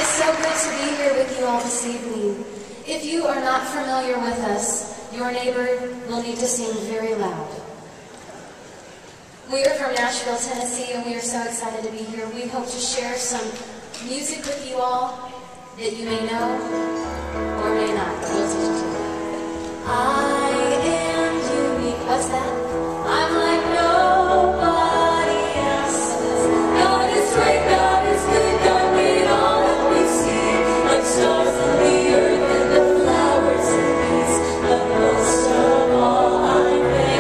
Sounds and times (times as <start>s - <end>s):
Happy music: 0.0s - 1.9s, 16.3s - 37.2s
Speech: 9.5s - 16.8s, 17.6s - 19.0s.